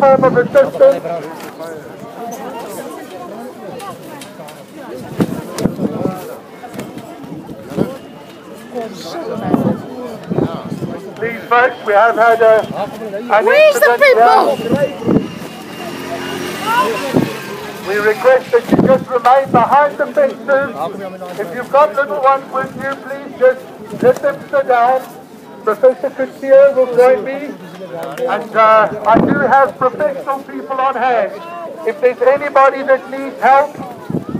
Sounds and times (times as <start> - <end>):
Speech: 0.0 - 15.1, 17.8 - 34.3.